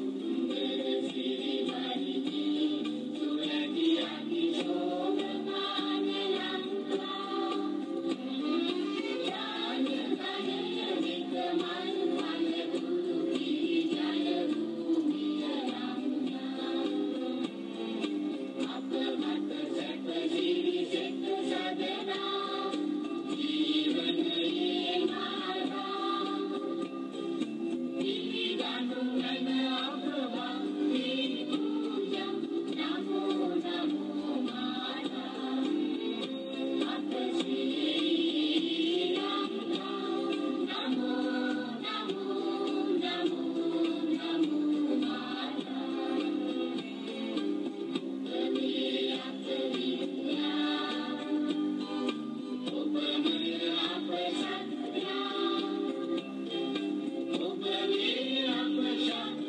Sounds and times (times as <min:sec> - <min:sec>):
Choir: 0:00.0 - 0:59.4.